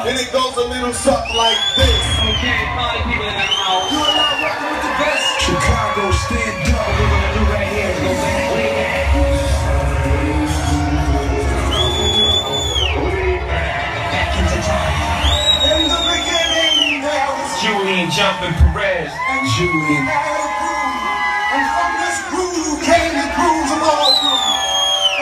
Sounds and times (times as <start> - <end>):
Speech: 0.0 - 8.7, 15.6 - 21.0, 21.6 - 24.4
Music: 0.0 - 18.8.